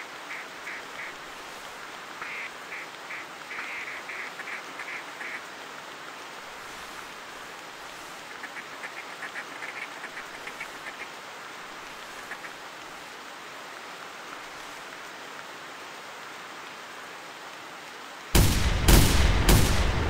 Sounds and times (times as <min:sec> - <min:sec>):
Quack: 0:02.2 - 0:05.4, 0:08.5 - 0:11.1.